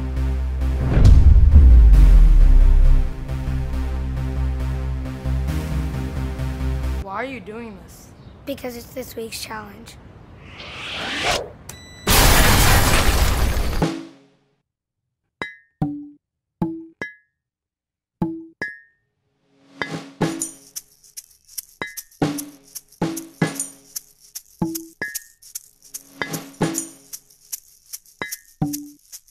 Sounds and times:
Music: 0:00.0 - 0:07.0, 0:19.3 - 0:20.8, 0:21.8 - 0:25.2, 0:26.2 - 0:27.1.

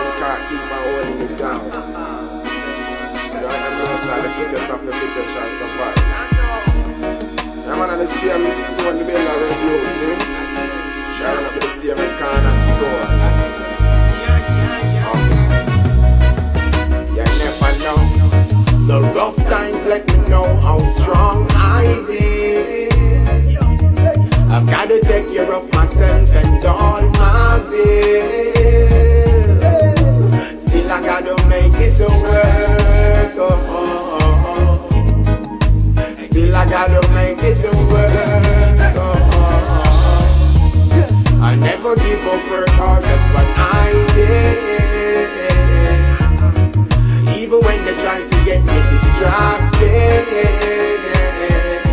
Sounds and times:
Music: 0:00.0 - 0:51.9.

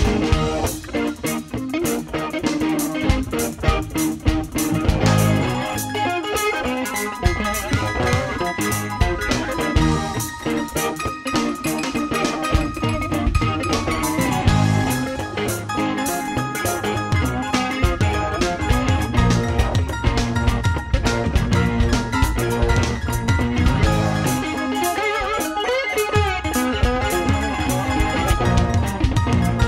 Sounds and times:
Bass guitar: 0:00.0 - 0:29.6.

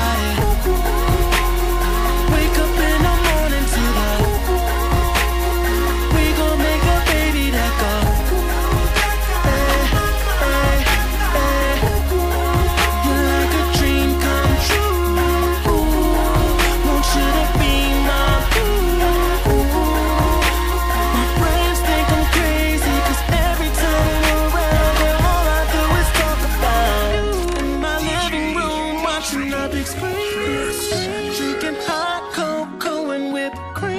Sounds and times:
Music: 0:00.0 - 0:33.9.

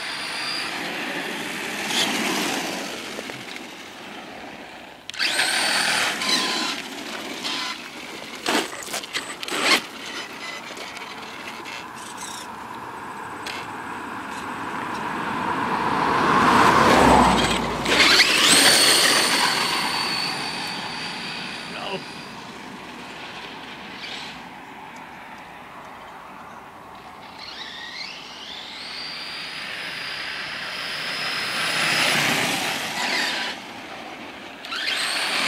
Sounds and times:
Speech: 0:21.7 - 0:22.1.

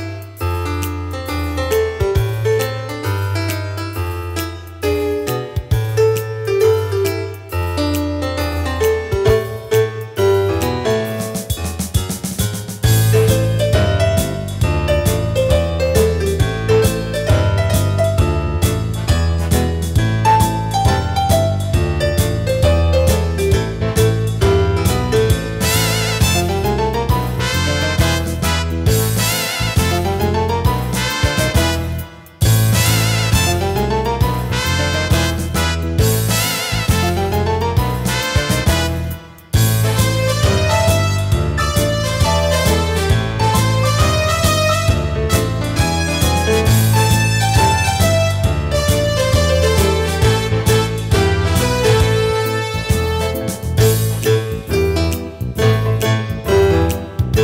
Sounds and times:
Music: 0:00.0 - 0:57.4.

